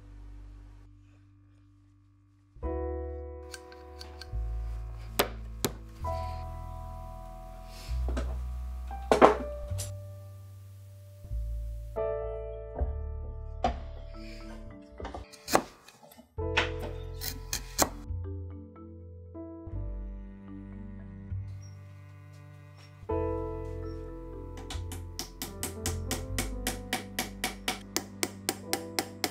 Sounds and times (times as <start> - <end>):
Music: 0.0 - 29.3.